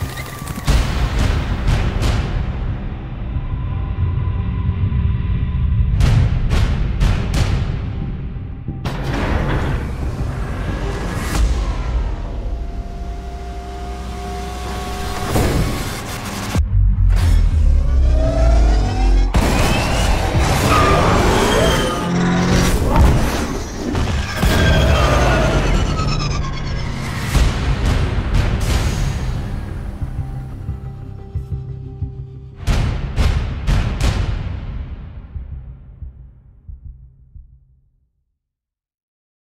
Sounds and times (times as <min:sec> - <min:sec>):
Music: 0:00.0 - 0:38.6.